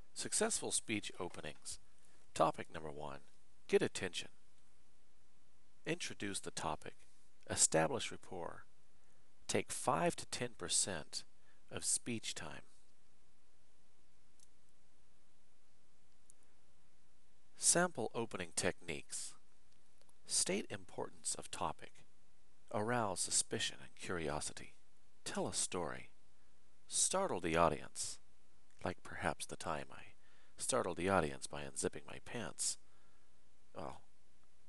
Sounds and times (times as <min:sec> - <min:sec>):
Narration, monologue: 0:00.0 - 0:34.6
Male speech, man speaking: 0:00.2 - 0:01.8, 0:02.4 - 0:04.4, 0:05.9 - 0:08.7, 0:09.5 - 0:12.7, 0:17.6 - 0:19.4, 0:20.3 - 0:22.0, 0:22.7 - 0:26.2, 0:26.9 - 0:28.2, 0:28.8 - 0:32.8, 0:33.8 - 0:34.1.